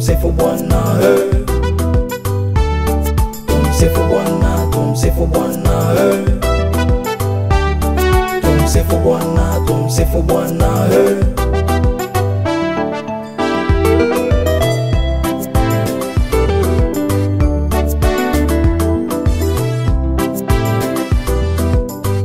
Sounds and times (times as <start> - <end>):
Gospel music: 0.0 - 22.2.